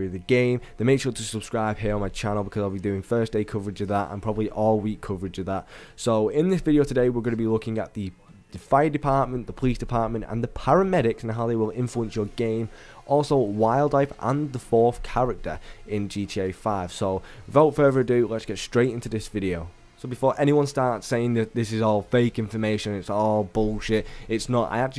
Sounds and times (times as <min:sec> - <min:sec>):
Music: 0:00.0 - 0:05.5, 0:06.4 - 0:24.9
Speech: 0:00.0 - 0:24.9.